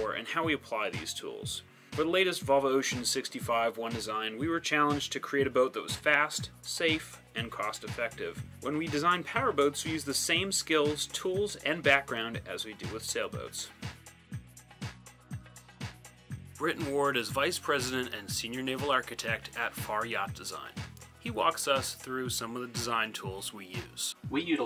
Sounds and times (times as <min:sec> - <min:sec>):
Speech: 0:00.0 - 0:13.8, 0:16.6 - 0:24.6
Music: 0:00.0 - 0:24.6.